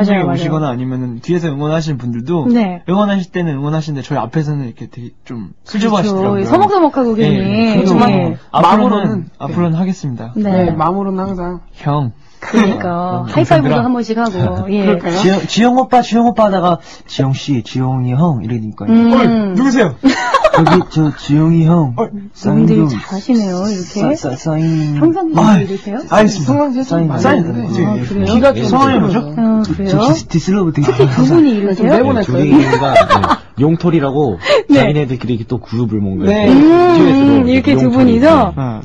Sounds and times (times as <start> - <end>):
Speech: 0.0 - 20.0, 20.6 - 38.8.